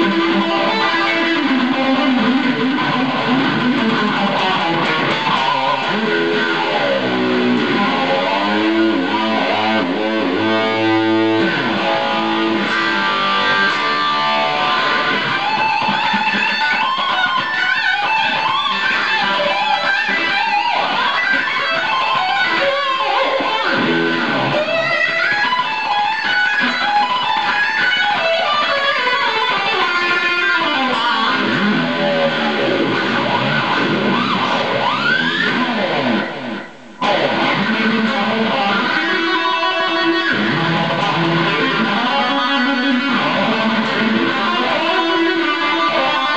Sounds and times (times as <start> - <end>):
Music: 0.0 - 46.3.